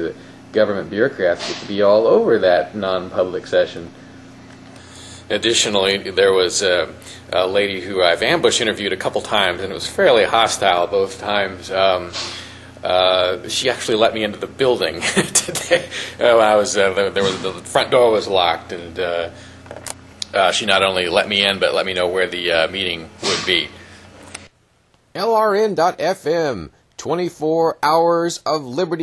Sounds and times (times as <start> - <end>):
Speech: 0.0 - 3.9, 5.3 - 12.2, 12.8 - 19.3, 20.2 - 23.8, 25.2 - 29.0.